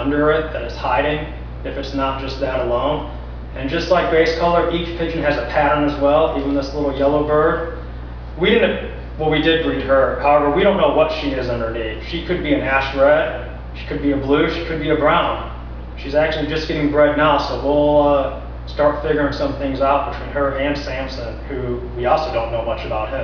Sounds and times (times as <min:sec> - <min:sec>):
Speech: 0:00.0 - 0:07.8, 0:08.4 - 0:23.2.